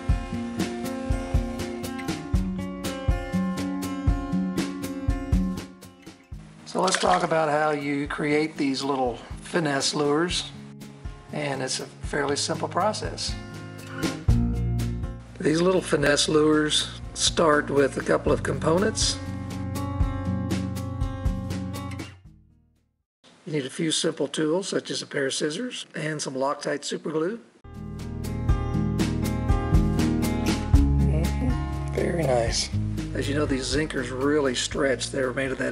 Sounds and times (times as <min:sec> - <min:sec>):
Music: 0:00.0 - 0:23.0, 0:27.7 - 0:35.7
Speech: 0:06.7 - 0:10.6, 0:11.3 - 0:13.4, 0:15.4 - 0:19.2, 0:23.4 - 0:27.5, 0:31.1 - 0:35.7.